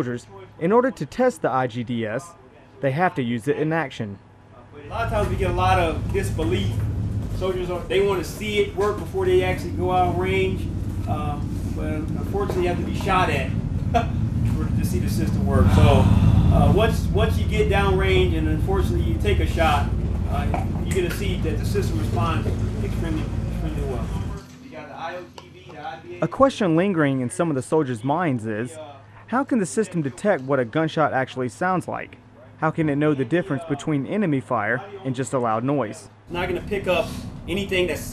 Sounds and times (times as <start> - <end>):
Speech: 0.0 - 6.8, 7.4 - 38.1.